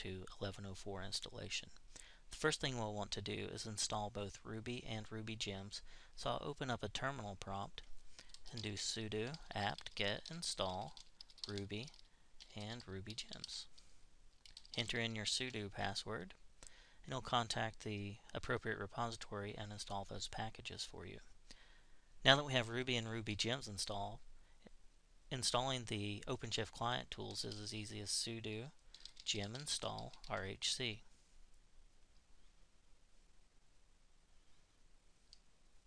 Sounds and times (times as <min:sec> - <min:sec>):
Speech: 0:00.0 - 0:07.9, 0:08.5 - 0:13.7, 0:14.8 - 0:16.4, 0:17.0 - 0:21.3, 0:22.2 - 0:24.2, 0:25.3 - 0:31.1.